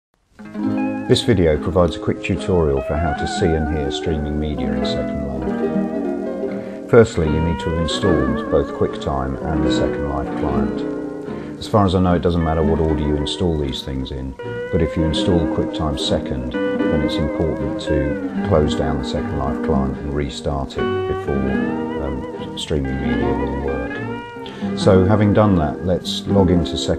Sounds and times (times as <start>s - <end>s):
Music: 0.2s - 26.9s
Speech: 1.1s - 5.6s, 6.8s - 26.9s.